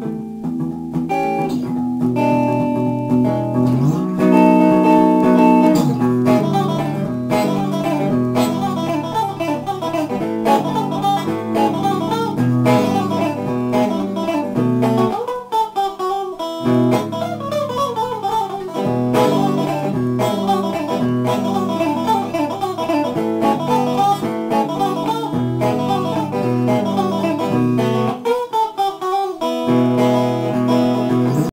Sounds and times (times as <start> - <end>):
Bass guitar: 0.0 - 15.3, 16.6 - 28.2, 29.7 - 31.5
Acoustic guitar: 0.0 - 15.7, 16.5 - 28.5, 29.2 - 31.5
Strum: 0.0 - 31.5.